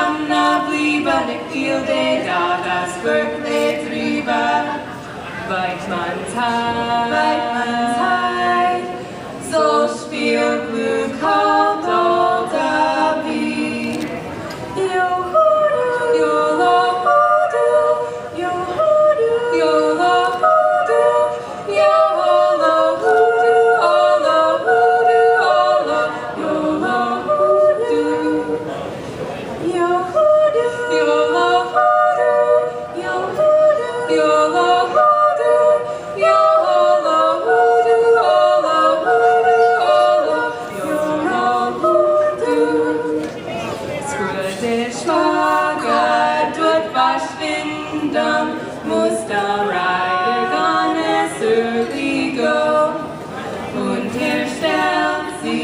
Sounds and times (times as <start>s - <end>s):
A capella: 0.0s - 55.6s
Singing: 0.0s - 55.6s
Speech: 43.2s - 45.2s.